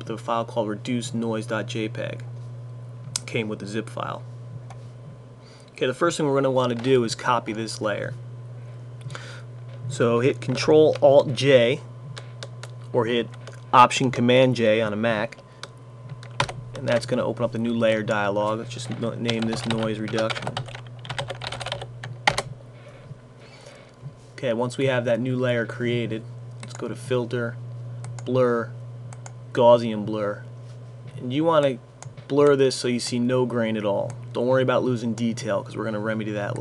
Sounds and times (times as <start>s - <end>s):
Speech: 0.0s - 2.3s, 3.2s - 4.3s, 5.8s - 8.2s, 9.9s - 11.9s, 12.9s - 15.4s, 16.8s - 20.6s, 24.4s - 27.6s, 28.2s - 28.8s, 29.6s - 30.5s, 31.1s - 36.6s.